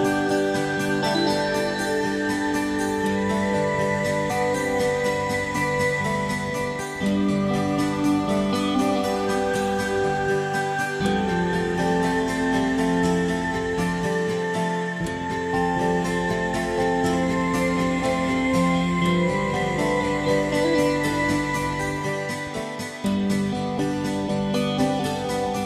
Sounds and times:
Music: 0.0s - 25.6s.

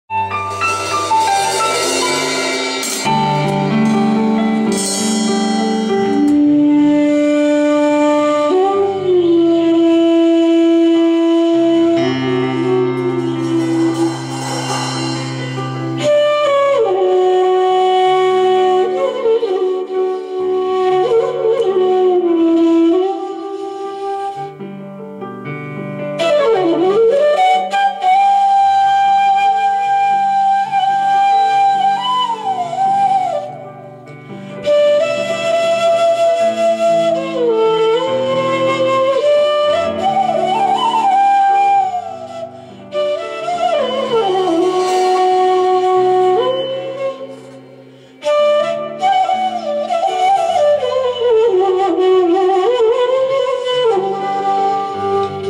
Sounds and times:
Flute: 0.1s - 55.4s.

